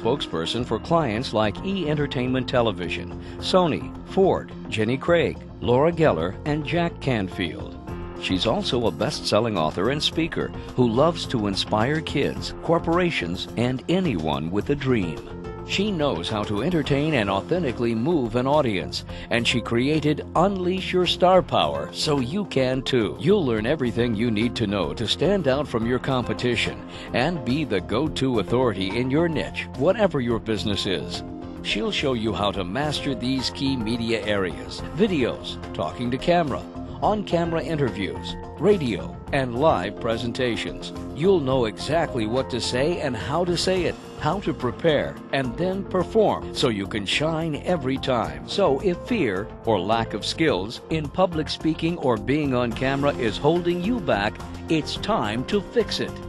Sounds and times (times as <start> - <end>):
Music: 0.0 - 56.2
Speech: 0.0 - 56.2.